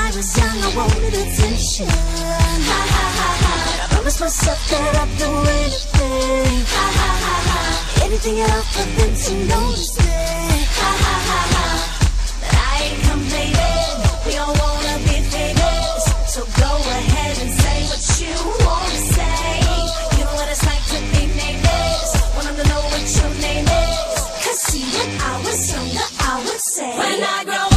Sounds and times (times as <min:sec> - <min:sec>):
Pop music: 0:00.0 - 0:27.7.